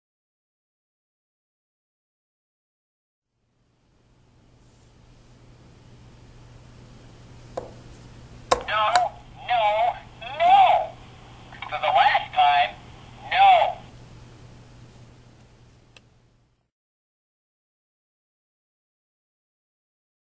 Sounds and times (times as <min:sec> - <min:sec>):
Speech: 0:08.6 - 0:11.0, 0:11.6 - 0:13.9.